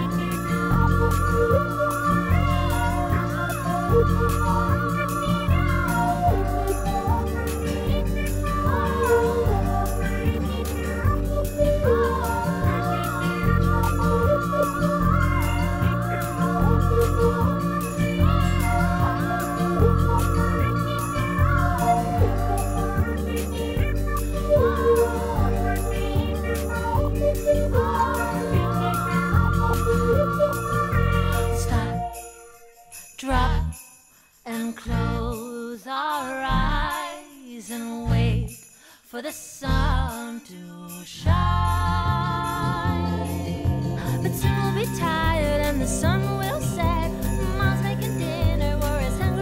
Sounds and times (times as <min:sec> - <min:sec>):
Jingle bell: 0:00.0 - 0:49.4.